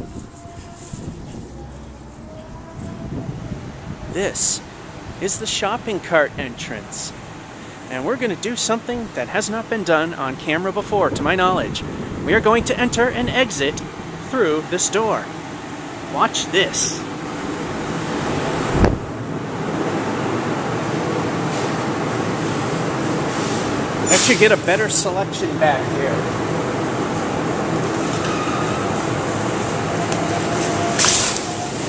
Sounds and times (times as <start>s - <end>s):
Speech: 4.1s - 4.6s, 5.2s - 7.2s, 7.9s - 15.3s, 16.1s - 17.0s, 24.1s - 26.3s.